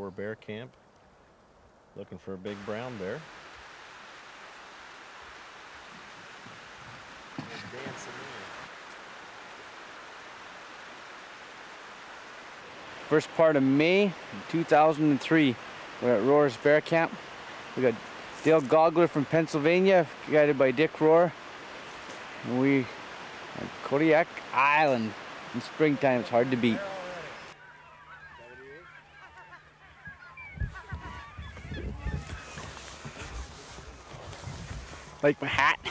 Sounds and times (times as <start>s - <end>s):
Speech: 0.0s - 0.7s, 2.0s - 3.3s, 7.5s - 8.5s, 13.1s - 17.2s, 17.8s - 21.3s, 22.4s - 22.9s, 23.6s - 27.3s, 35.2s - 35.9s
Outside, rural or natural: 0.0s - 35.9s
Goose: 26.7s - 33.7s.